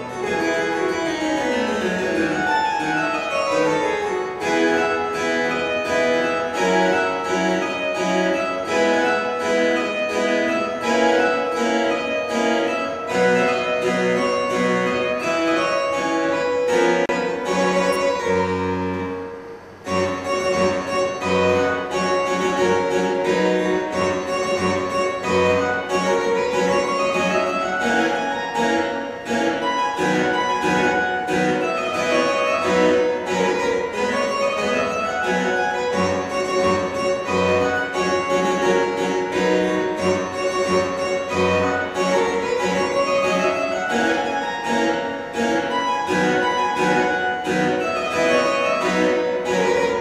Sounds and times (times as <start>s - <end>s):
Harpsichord: 0.0s - 50.0s.